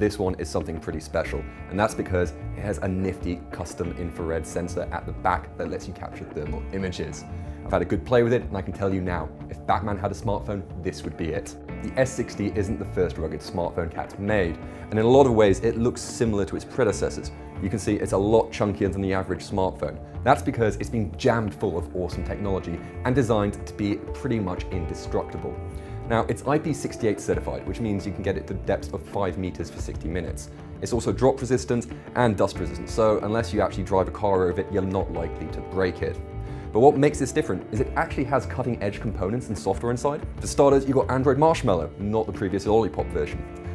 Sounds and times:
Speech: 0.0 - 43.4
Music: 0.0 - 43.7.

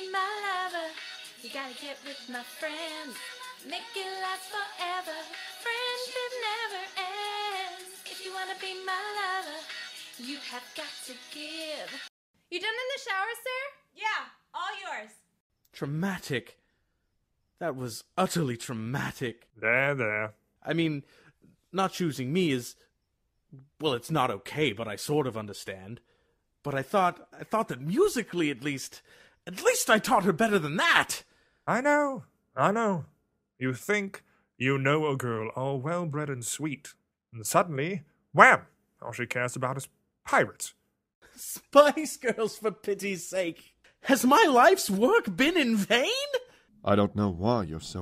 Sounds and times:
Speech: 15.8 - 16.6, 17.6 - 21.0, 21.7 - 22.8, 23.6 - 26.0, 26.6 - 40.8, 41.4 - 48.0.

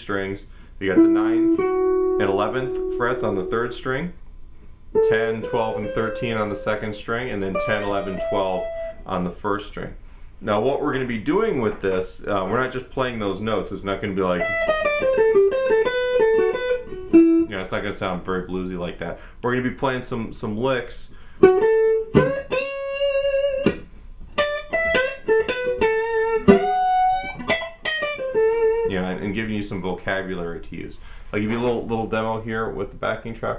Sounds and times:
Speech: 0.0 - 1.6, 2.2 - 4.2, 5.0 - 14.6, 17.5 - 21.2, 28.9 - 33.5
Guitar: 0.0 - 9.8, 10.6 - 30.7.

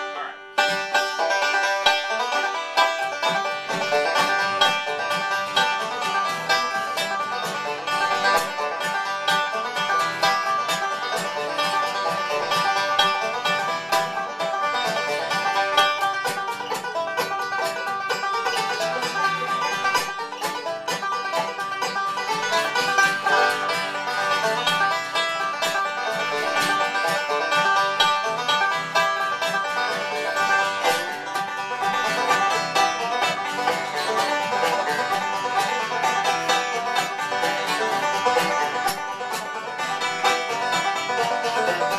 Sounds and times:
Banjo: 0.0 - 41.9.

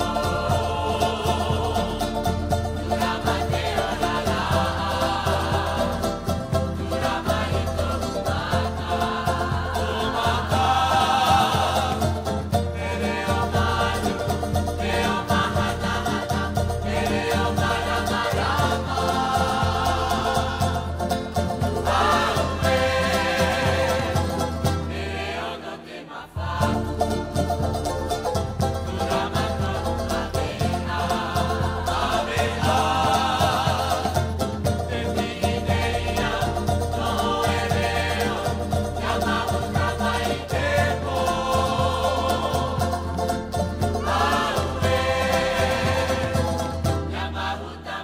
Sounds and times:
Salsa music: 0.0 - 48.0.

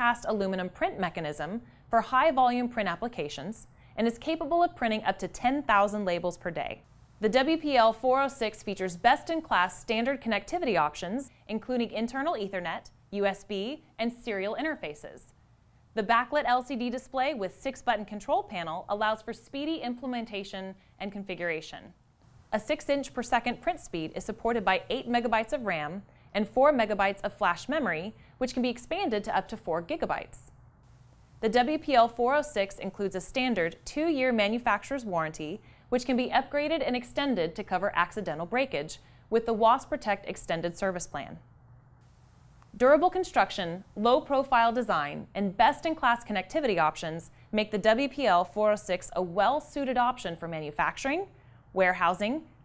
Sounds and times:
Speech: 0.0 - 15.4, 16.0 - 22.0, 22.6 - 30.5, 31.4 - 41.4, 42.8 - 52.6.

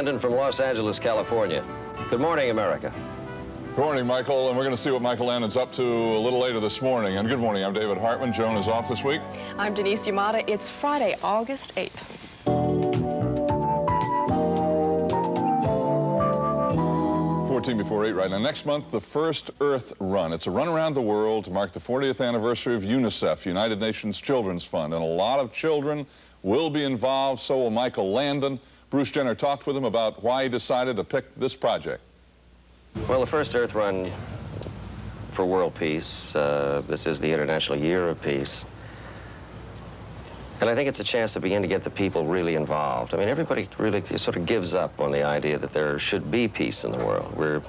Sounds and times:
Speech: 0.0 - 3.0, 3.8 - 12.0, 17.5 - 32.1, 33.0 - 34.2, 35.4 - 38.7, 40.6 - 47.6
Music: 0.0 - 11.2, 12.5 - 18.9.

